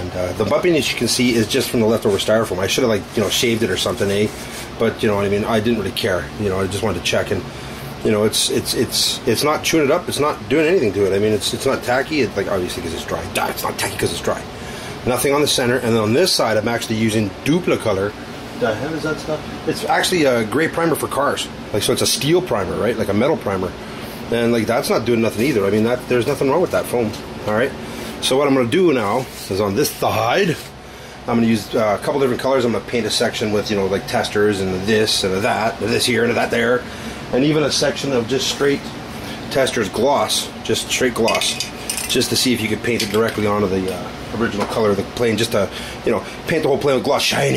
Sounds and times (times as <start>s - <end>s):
Speech: 0.0s - 30.7s, 31.3s - 38.9s, 39.5s - 47.5s.